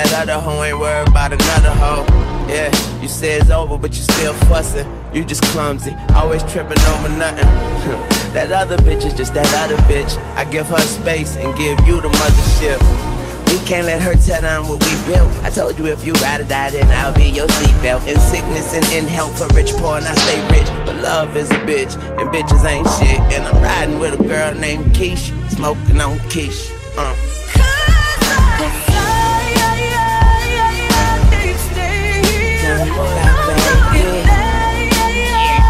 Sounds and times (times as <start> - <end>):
Music: 0.0 - 35.7
Rapping: 0.0 - 35.7.